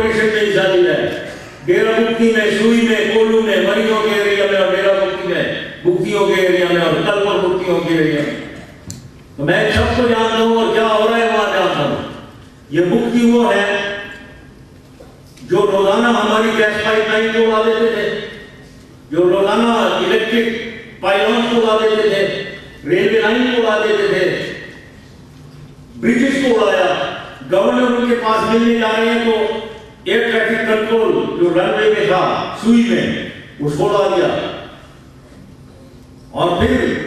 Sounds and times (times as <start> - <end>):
Male speech, man speaking: 0.0 - 8.5, 9.4 - 14.0, 15.5 - 18.4, 19.1 - 24.7, 26.0 - 34.6, 36.3 - 37.0.